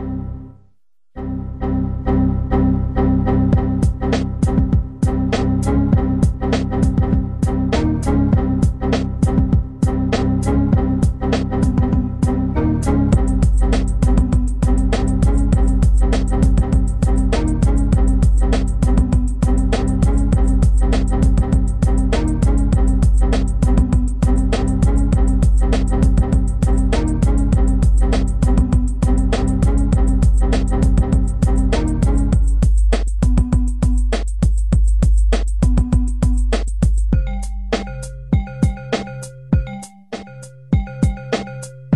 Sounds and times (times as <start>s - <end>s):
Music: 0.0s - 41.9s.